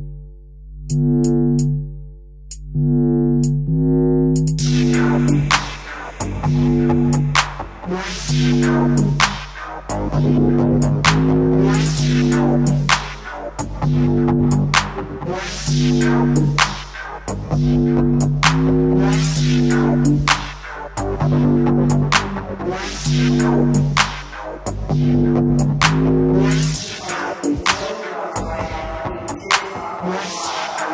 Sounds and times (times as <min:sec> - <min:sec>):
Dubstep: 0:04.4 - 0:30.9.